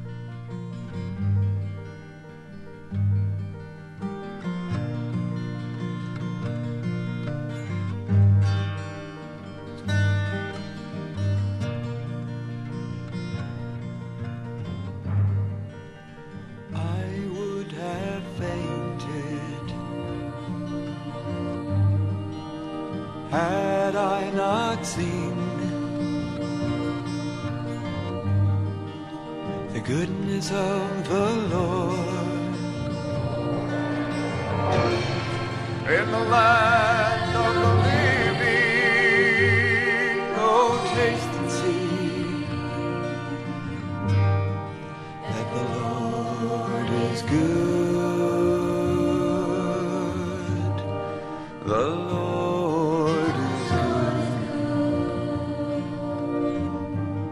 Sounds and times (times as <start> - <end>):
Background music: 0.0 - 57.3.